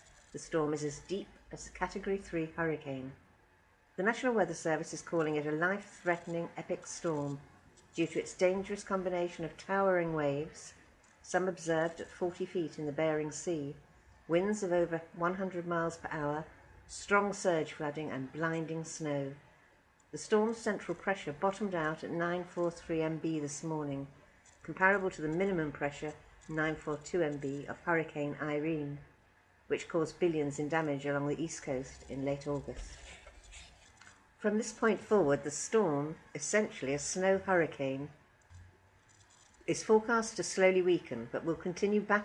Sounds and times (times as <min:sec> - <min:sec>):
Speech: 0:00.4 - 0:03.2, 0:04.0 - 0:19.4, 0:20.2 - 0:29.1, 0:29.7 - 0:33.6, 0:34.4 - 0:38.2, 0:39.7 - 0:42.2.